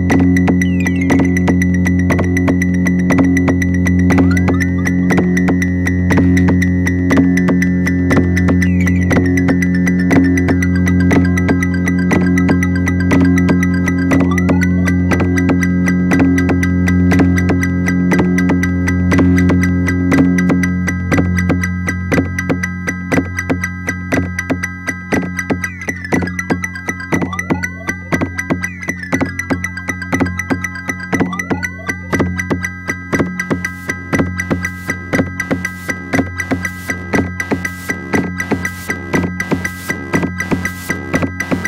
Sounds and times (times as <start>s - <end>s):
Electronic music: 0.0s - 41.6s
Synthesizer: 0.0s - 41.6s.